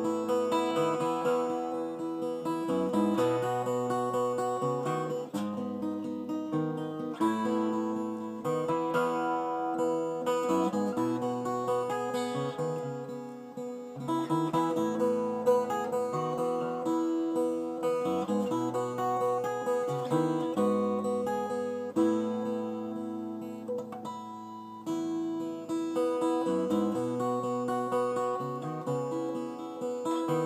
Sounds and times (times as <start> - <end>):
Acoustic guitar: 0.0 - 30.4.